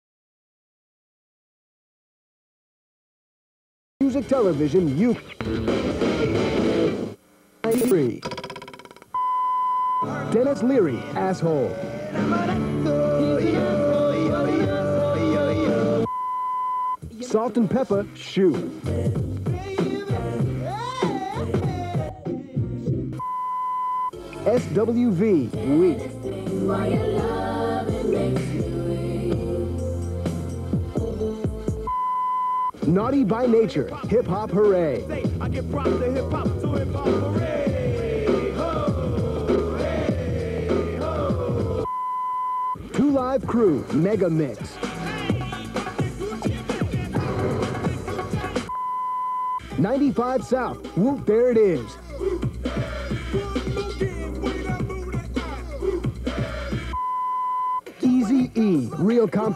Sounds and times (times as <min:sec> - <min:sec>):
Speech: 0:04.0 - 0:05.4, 0:07.6 - 0:08.2, 0:10.2 - 0:11.8, 0:17.2 - 0:18.7, 0:24.4 - 0:26.0, 0:32.8 - 0:36.3, 0:43.0 - 0:44.8, 0:49.8 - 0:52.0, 0:58.0 - 0:59.5
Music: 0:04.0 - 0:07.2, 0:10.0 - 0:16.1, 0:16.9 - 0:42.0, 0:42.7 - 0:59.5.